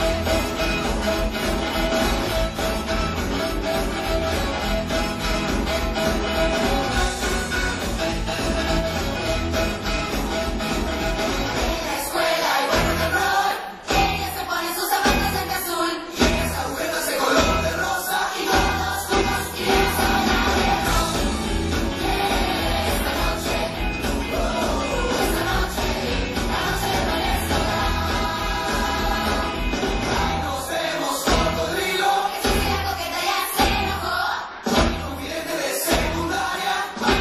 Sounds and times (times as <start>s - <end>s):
Rock and roll: 0.0s - 37.2s.